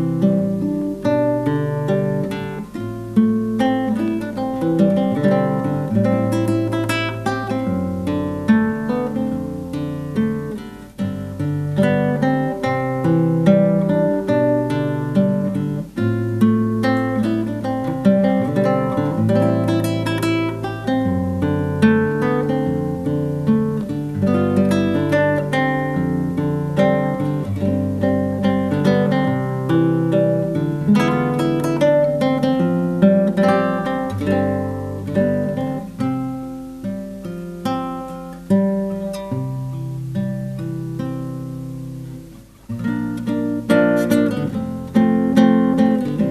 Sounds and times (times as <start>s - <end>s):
Acoustic guitar: 0.0s - 46.3s.